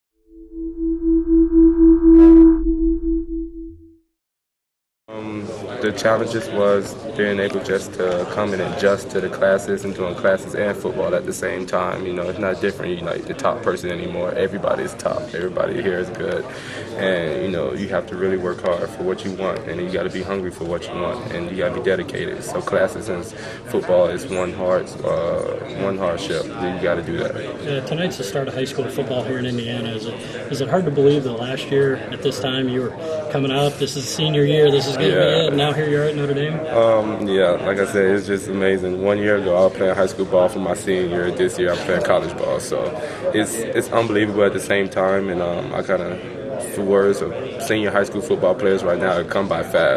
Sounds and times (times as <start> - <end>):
Sidetone: 0.2 - 4.1
Speech: 5.1 - 49.9.